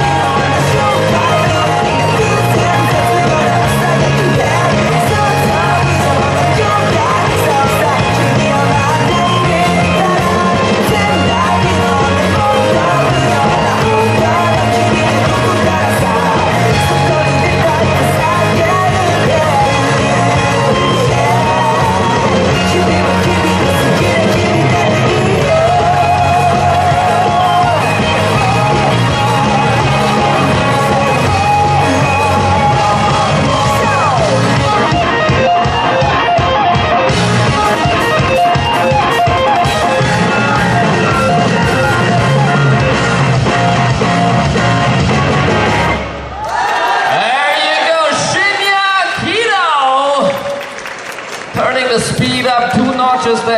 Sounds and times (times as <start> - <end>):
Rock and roll: 0.0 - 53.5.